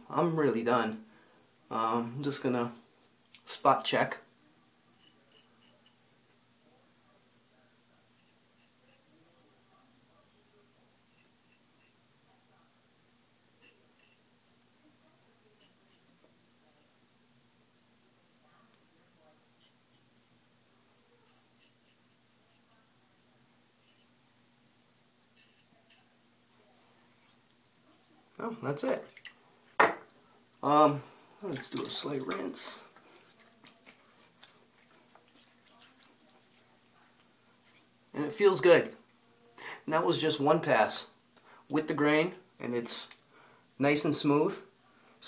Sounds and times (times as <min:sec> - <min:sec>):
Inside, small room: 0:00.0 - 0:45.2
Speech: 0:03.4 - 0:05.2, 0:30.6 - 0:34.3, 0:38.1 - 0:39.0, 0:39.9 - 0:43.2, 0:43.8 - 0:45.2.